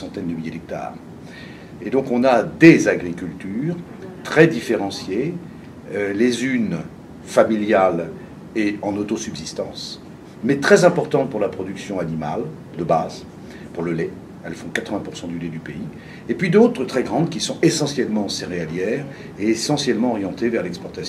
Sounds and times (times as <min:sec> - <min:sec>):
Speech: 0:00.0 - 0:01.0, 0:01.8 - 0:21.0.